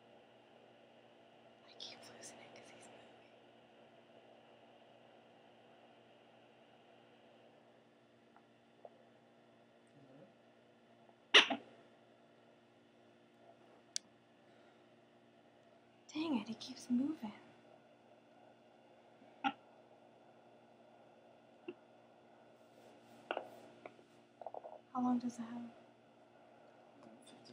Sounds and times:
Inside, small room: 0.0s - 27.5s
Speech: 10.0s - 10.3s, 16.1s - 17.4s, 25.0s - 25.7s.

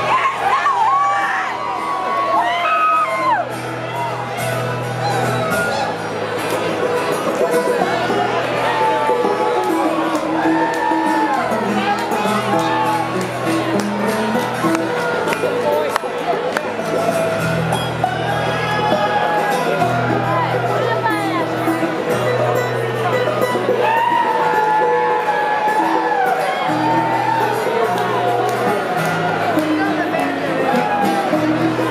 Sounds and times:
Music: 0.0s - 31.9s
Speech: 18.4s - 23.6s, 27.5s - 31.9s.

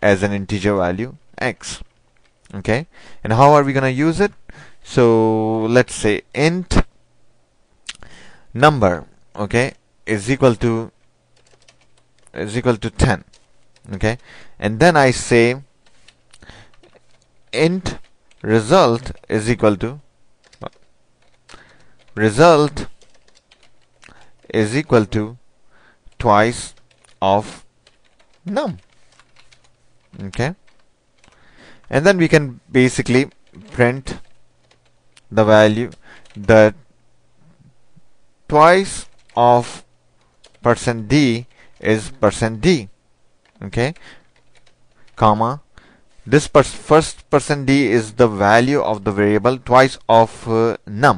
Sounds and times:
Computer keyboard: 11.4s - 12.3s, 13.3s - 13.9s, 15.8s - 17.3s, 20.4s - 22.2s, 22.9s - 24.5s, 26.7s - 27.2s, 27.8s - 31.4s, 40.4s - 40.7s, 44.4s - 45.2s.

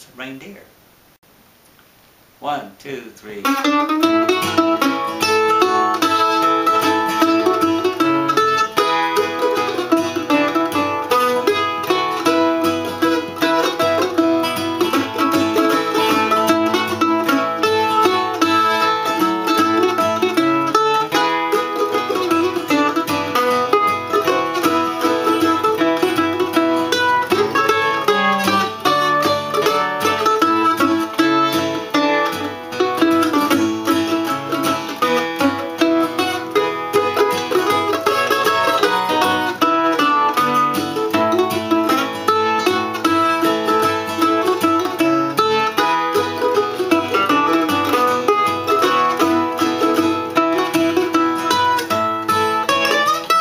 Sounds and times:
Strum: 2.4s - 53.4s.

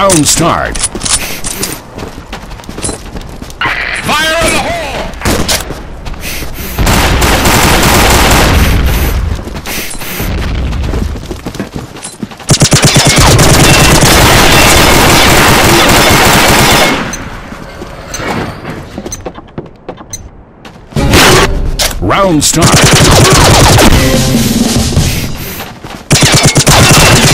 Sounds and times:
Speech: 4.0s - 5.2s, 22.0s - 23.4s.

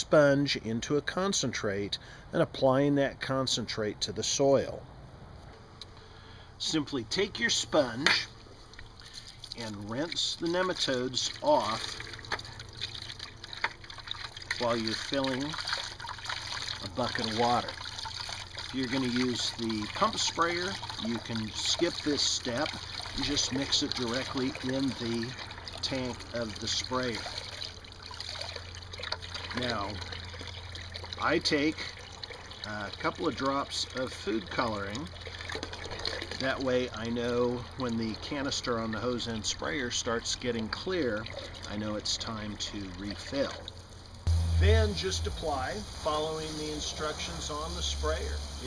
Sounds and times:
Speech: 0.0s - 4.8s, 6.6s - 8.3s, 9.6s - 11.9s, 14.6s - 15.6s, 16.8s - 17.7s, 18.7s - 27.4s, 29.5s - 30.0s, 31.2s - 31.9s, 32.6s - 35.1s, 36.4s - 43.6s, 44.6s - 48.6s
Liquid: 5.9s - 48.6s.

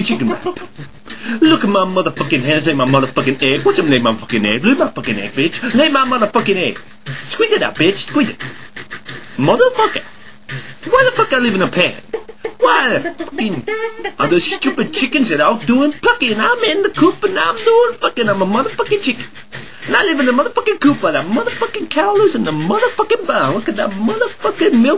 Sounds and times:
Speech: 0.0s - 0.7s, 1.4s - 8.4s, 9.4s - 10.1s, 10.9s - 12.0s, 12.6s - 24.9s.

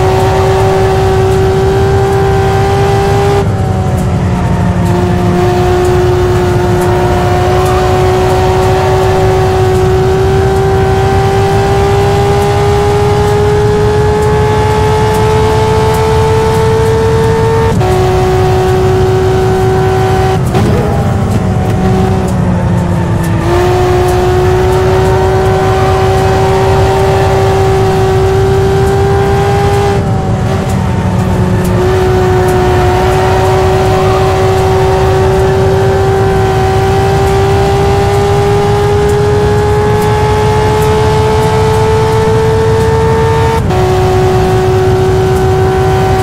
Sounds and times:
Car: 0.0s - 46.2s.

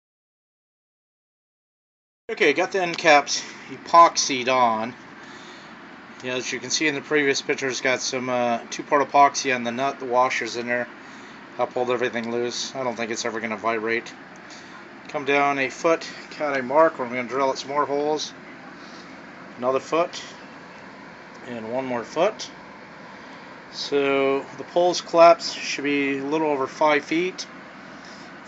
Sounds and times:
Speech: 2.3s - 5.0s, 6.2s - 10.9s, 11.6s - 14.2s, 15.1s - 19.0s, 19.6s - 20.4s, 21.4s - 22.6s, 23.7s - 27.5s.

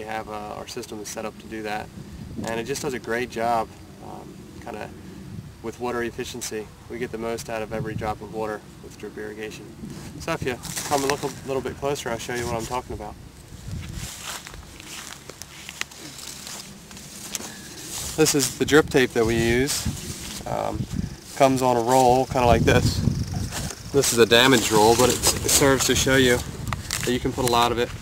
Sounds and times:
Speech: 0.0s - 4.9s, 5.6s - 13.2s, 18.2s - 20.8s, 21.4s - 23.0s, 23.9s - 26.4s, 27.0s - 27.9s.

